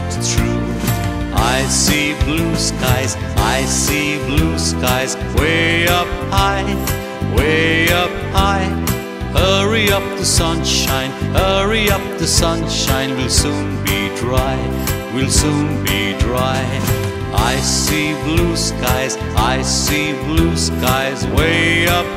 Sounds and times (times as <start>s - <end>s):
Music for children: 0.0s - 22.1s.